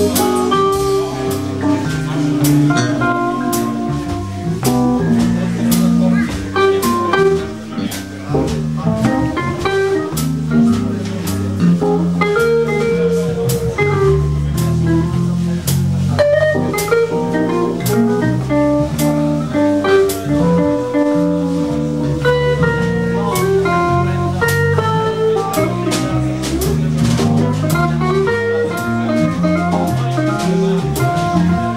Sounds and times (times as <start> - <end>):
Electric guitar: 0.0 - 31.7
Speech: 0.0 - 31.7
Strum: 0.0 - 31.7.